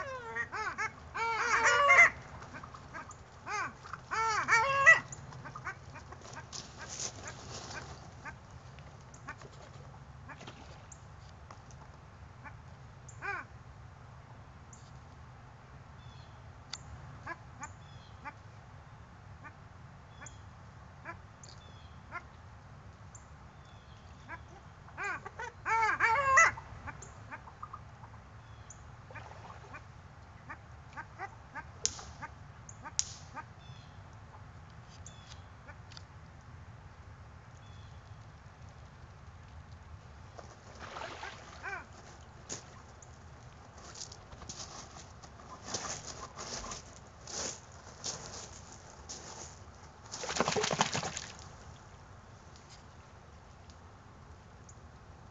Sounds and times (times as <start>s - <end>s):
Duck: 0.0s - 8.4s, 24.2s - 27.8s, 40.9s - 41.9s, 45.5s - 46.9s.